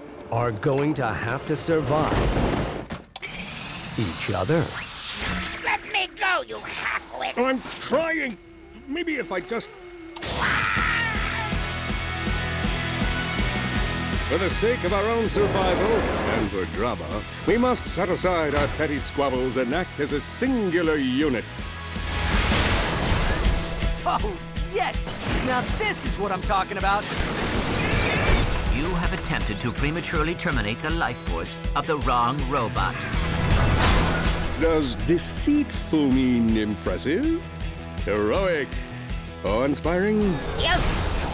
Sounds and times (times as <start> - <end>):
Speech: 0.3 - 2.3, 4.0 - 4.7, 14.3 - 21.4, 28.8 - 33.0
Music: 9.9 - 41.3.